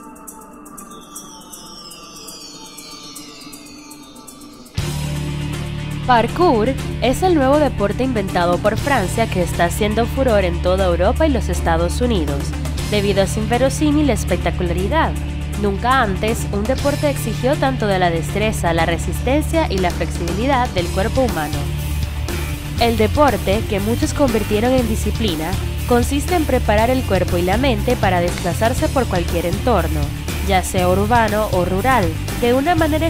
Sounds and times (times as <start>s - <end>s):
Music: 0.0s - 33.1s
Speech: 6.1s - 21.7s, 22.8s - 33.1s.